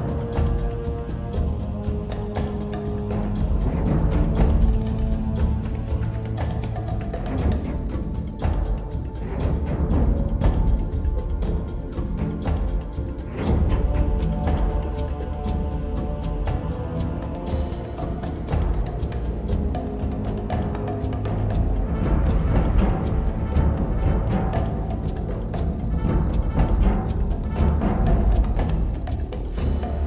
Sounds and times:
Timpani: 0:00.0 - 0:30.0.

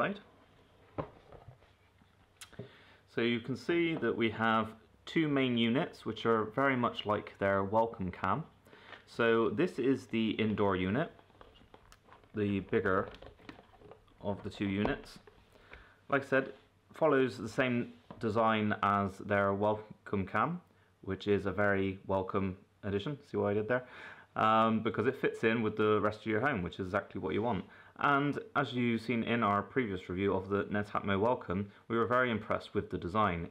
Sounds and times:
Speech: 0:00.0 - 0:00.3, 0:03.1 - 0:11.2, 0:12.3 - 0:13.3, 0:14.2 - 0:15.3, 0:16.1 - 0:33.5.

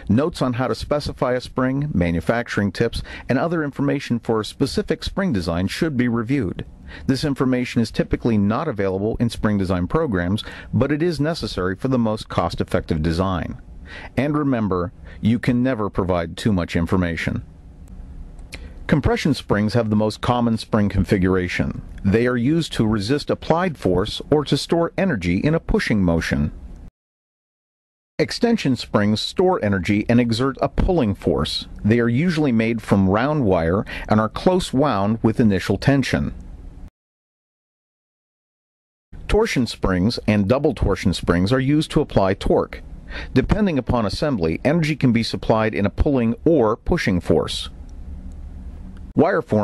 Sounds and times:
Speech: 0:00.0 - 0:17.5, 0:18.9 - 0:26.6, 0:28.2 - 0:36.4, 0:39.3 - 0:47.8, 0:49.2 - 0:49.6.

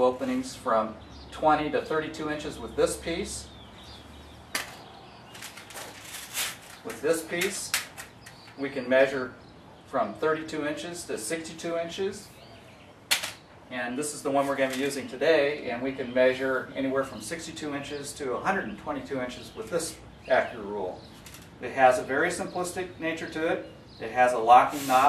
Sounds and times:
Speech: 0:00.0 - 0:03.5, 0:06.9 - 0:07.8, 0:08.6 - 0:12.3, 0:13.7 - 0:21.0, 0:21.6 - 0:25.0.

